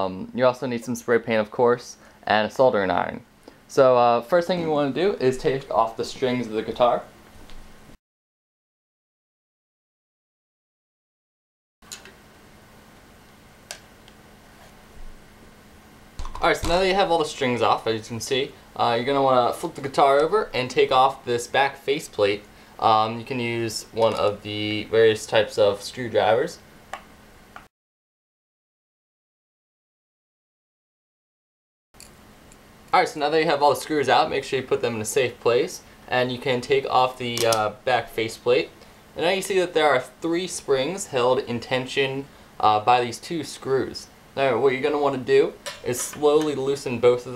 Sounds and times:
Speech: 0:00.0 - 0:07.2, 0:16.4 - 0:26.6, 0:32.9 - 0:47.3.

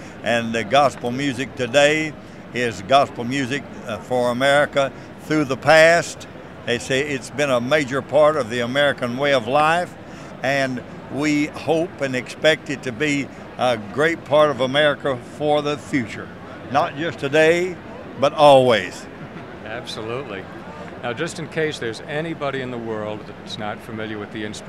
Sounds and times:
Speech: 0:00.2 - 0:19.0, 0:19.6 - 0:24.6.

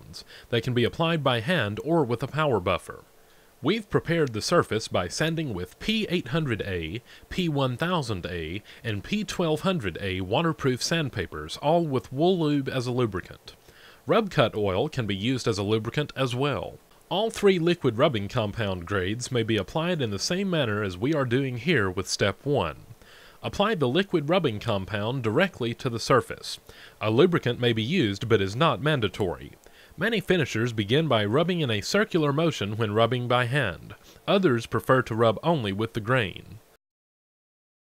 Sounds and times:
Speech: 0:00.0 - 0:36.7.

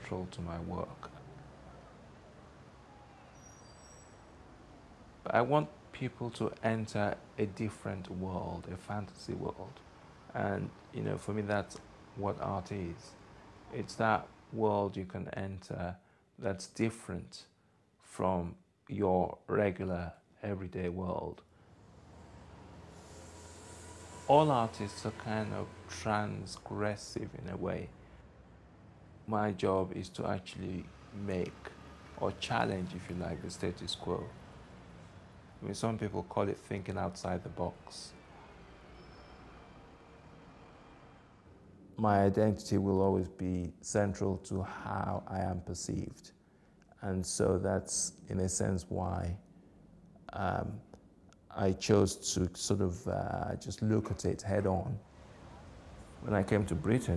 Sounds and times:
Speech: 0:00.0 - 0:01.2, 0:05.3 - 0:21.4, 0:24.3 - 0:27.9, 0:29.3 - 0:34.3, 0:35.6 - 0:38.2, 0:42.0 - 0:49.4, 0:50.2 - 0:50.9, 0:51.5 - 0:55.0, 0:56.2 - 0:57.1.

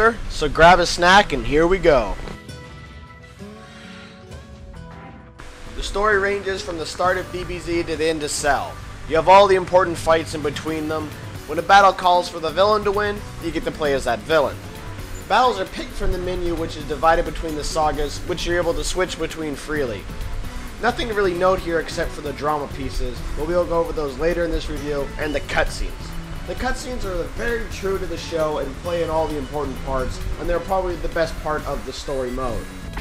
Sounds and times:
Speech: 0:00.0 - 0:02.2, 0:05.8 - 0:14.6, 0:15.3 - 0:20.0, 0:20.8 - 0:33.0
Music: 0:00.0 - 0:33.0.

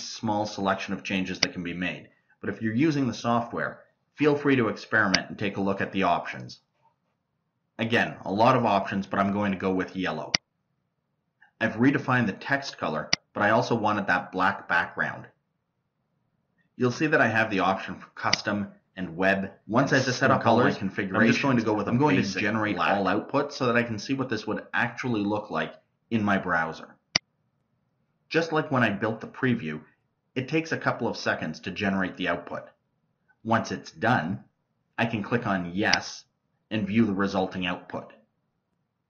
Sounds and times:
Narration, monologue: 0:00.0 - 0:39.0.

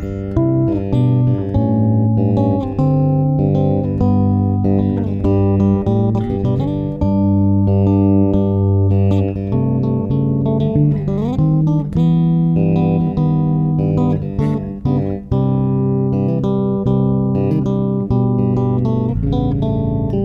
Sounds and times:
Electronic tuner: 0:00.0 - 0:20.2
Guitar: 0:00.0 - 0:20.2.

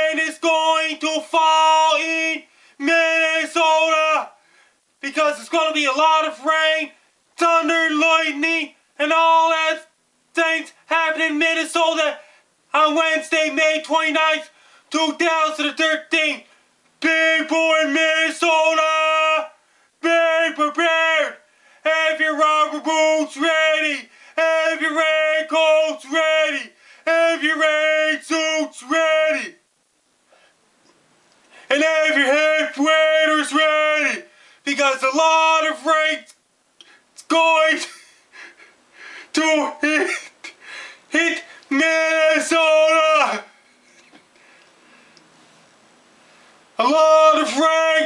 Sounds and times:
Speech: 0:00.0 - 0:04.4, 0:05.0 - 0:29.6, 0:31.7 - 0:36.4, 0:37.2 - 0:38.1, 0:39.3 - 0:40.5, 0:41.1 - 0:43.5, 0:46.8 - 0:48.0.

